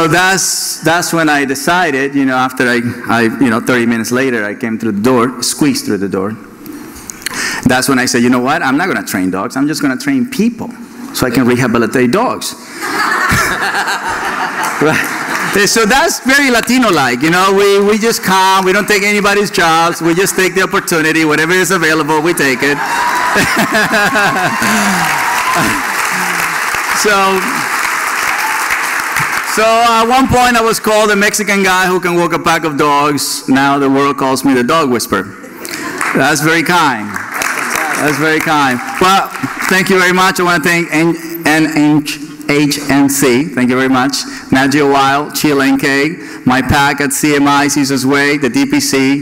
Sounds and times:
Speech: 0.0 - 6.4, 7.6 - 12.6, 14.8 - 22.8, 27.0 - 27.6, 29.5 - 35.3, 36.2 - 37.2, 37.8 - 49.2.

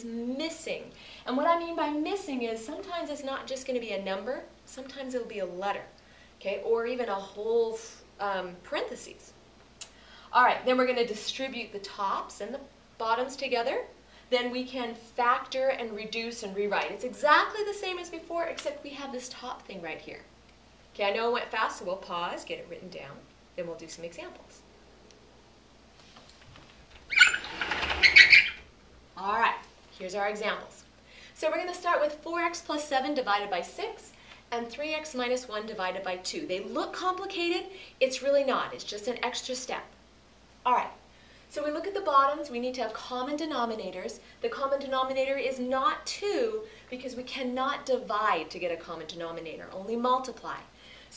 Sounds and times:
Speech: 0.0 - 9.3, 10.3 - 20.3, 21.0 - 24.6, 29.2 - 40.0, 40.7 - 51.1.

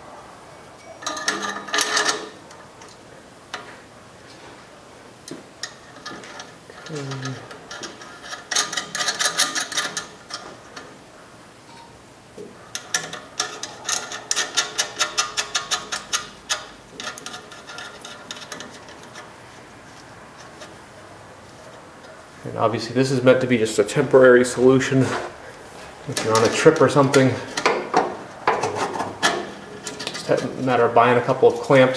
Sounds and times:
Speech: 22.4 - 25.3, 26.1 - 27.5, 30.2 - 31.9.

